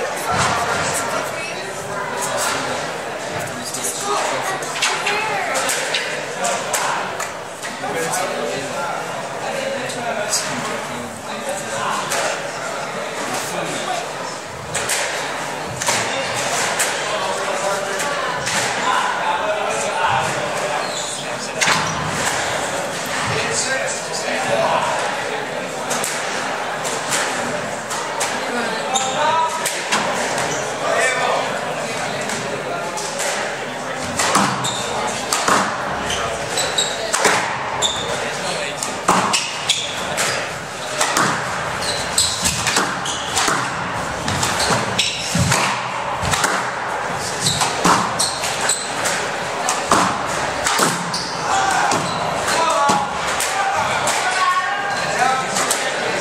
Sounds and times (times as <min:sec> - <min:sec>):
Speech: 0:00.0 - 0:41.5, 0:49.1 - 0:56.2
Inside, public space: 0:00.0 - 0:56.2.